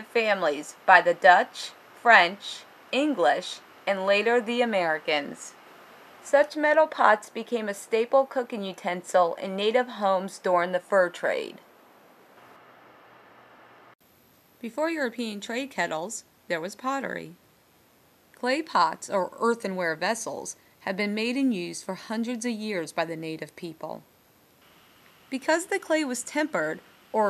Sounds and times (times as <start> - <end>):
Speech: 0.0 - 5.6, 6.3 - 11.6, 14.6 - 17.4, 18.4 - 24.0, 25.3 - 27.2.